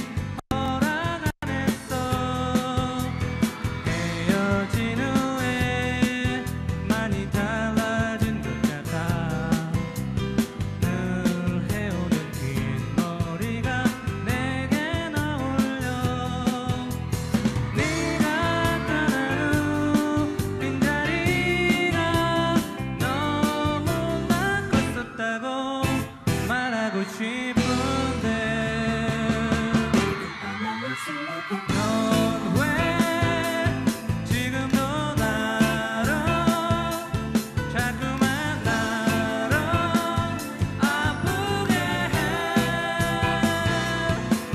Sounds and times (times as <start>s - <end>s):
Music: 0.0s - 44.5s.